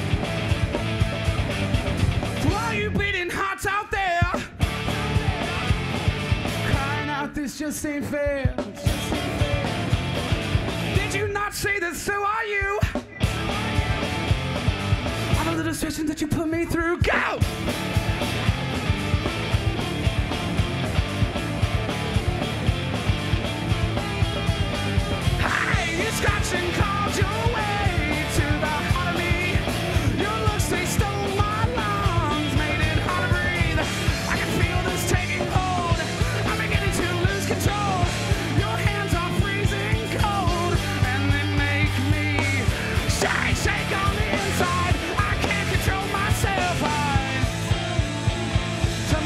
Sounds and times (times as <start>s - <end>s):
Music: 0.0s - 49.2s
Speech: 2.4s - 4.5s, 11.0s - 13.8s, 15.4s - 17.5s.